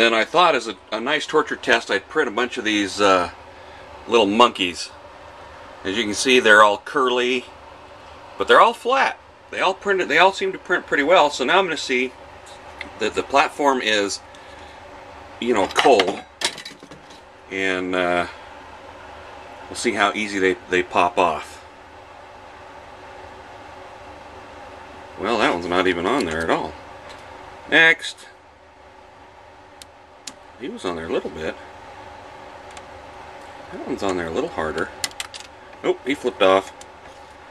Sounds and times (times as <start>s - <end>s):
Speech: 0.0s - 3.4s, 4.1s - 5.0s, 5.8s - 7.5s, 8.4s - 12.2s, 13.0s - 14.2s, 15.4s - 16.2s, 17.5s - 18.4s, 19.7s - 21.6s, 25.2s - 26.8s, 27.7s - 28.4s, 30.6s - 31.7s, 33.7s - 35.0s, 35.8s - 36.8s.